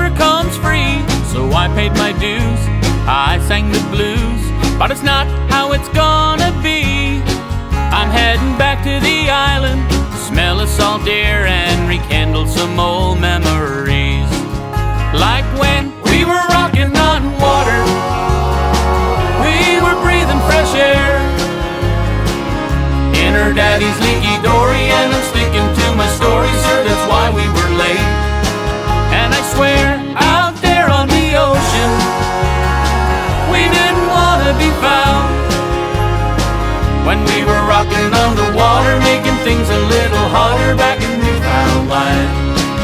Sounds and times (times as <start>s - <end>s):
Music: 0.0s - 42.8s.